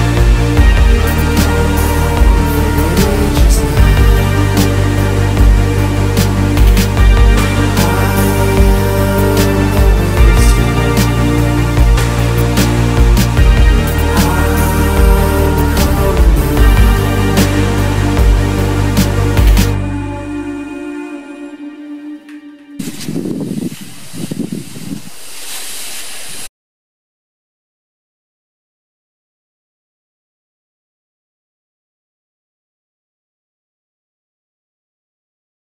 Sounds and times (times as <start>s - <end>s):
Music: 0.0s - 23.4s.